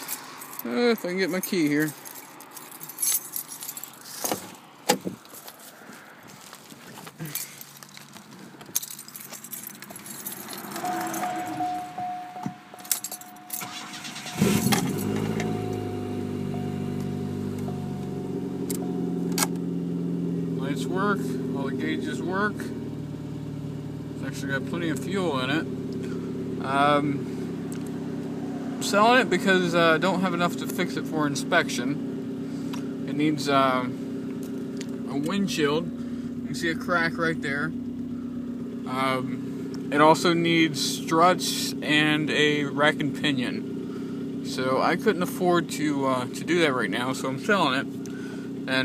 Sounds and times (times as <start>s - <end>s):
Car: 0.0s - 48.8s
Medium engine (mid frequency): 0.0s - 48.8s
Idling: 7.2s - 48.8s
Engine starting: 13.4s - 15.6s.